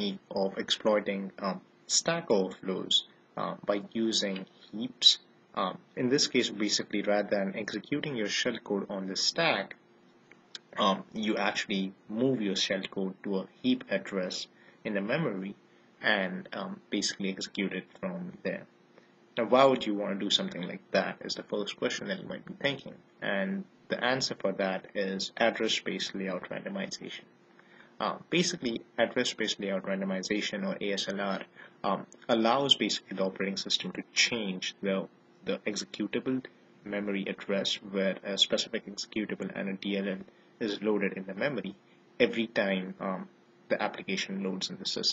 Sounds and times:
Speech: 0:00.0 - 0:09.8, 0:10.6 - 0:18.7, 0:19.4 - 0:27.3, 0:28.0 - 0:45.1.

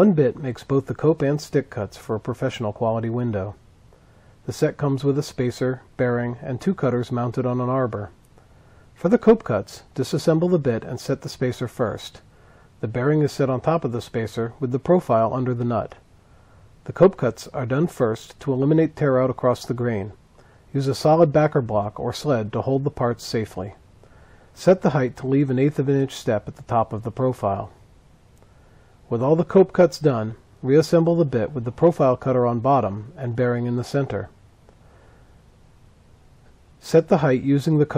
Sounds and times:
Speech: 0:00.0 - 0:03.6, 0:04.4 - 0:08.2, 0:09.0 - 0:16.1, 0:16.8 - 0:23.8, 0:24.6 - 0:27.8, 0:29.1 - 0:34.4, 0:36.8 - 0:37.9.

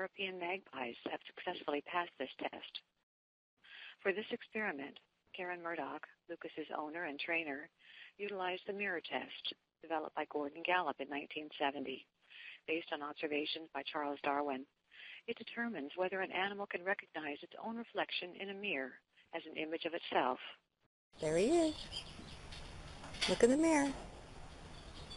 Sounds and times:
Speech: 0:00.0 - 0:02.8, 0:03.7 - 0:20.6, 0:21.2 - 0:21.8, 0:23.2 - 0:24.0.

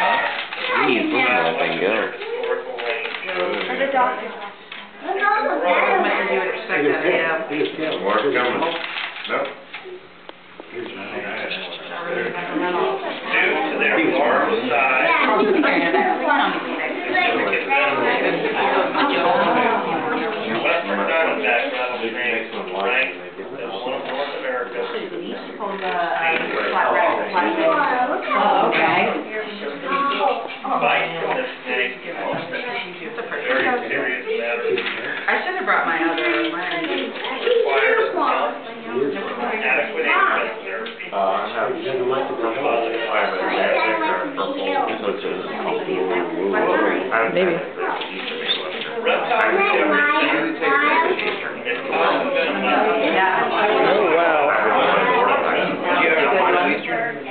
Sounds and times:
Speech: 0:10.8 - 0:57.3.

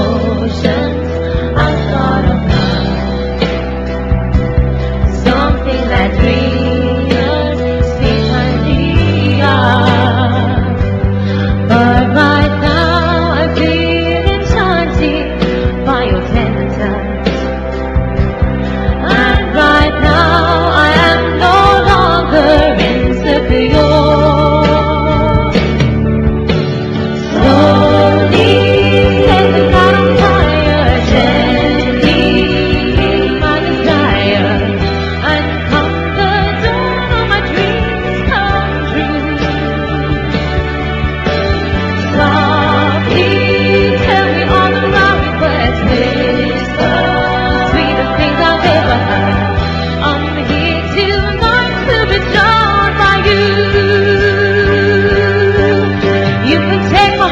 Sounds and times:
Music: 0:00.0 - 0:57.3.

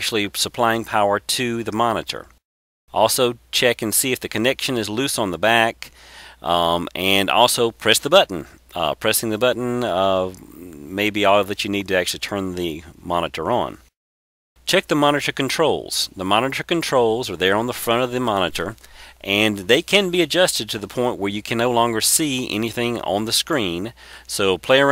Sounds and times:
Speech: 0:00.0 - 0:13.9, 0:14.7 - 0:24.9.

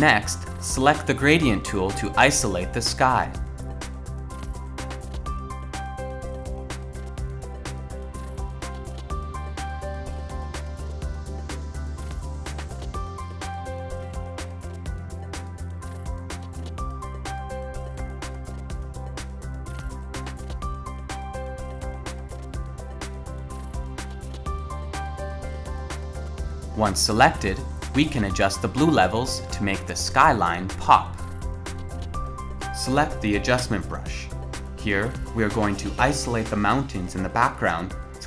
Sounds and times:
Music: 0:00.0 - 0:38.2.

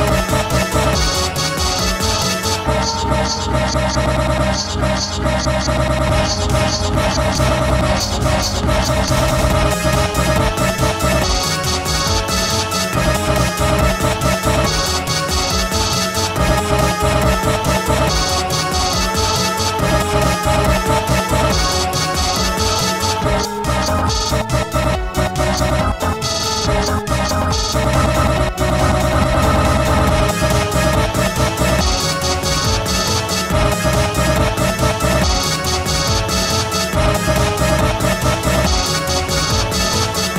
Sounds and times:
Music: 0:00.0 - 0:40.3.

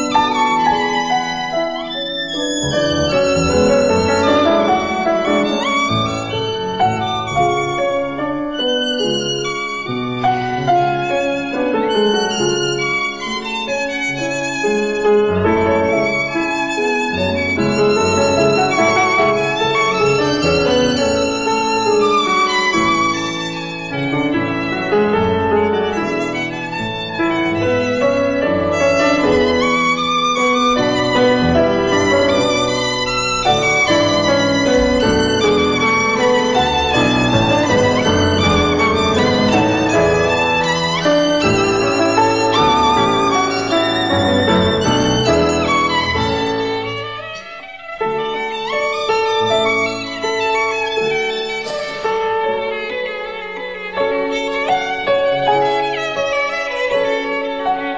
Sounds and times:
Violin, fiddle: 0:00.0 - 0:57.9.

